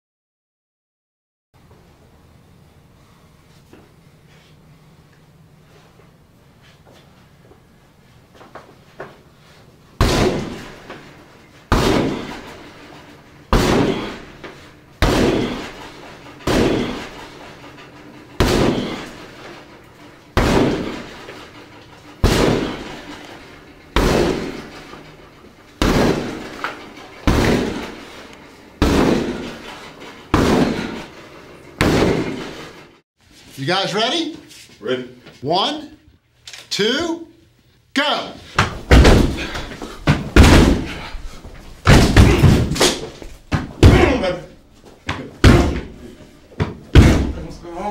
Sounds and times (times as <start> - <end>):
Speech: 33.6 - 36.1, 36.7 - 37.4, 38.0 - 38.4, 43.8 - 44.6, 47.3 - 47.9.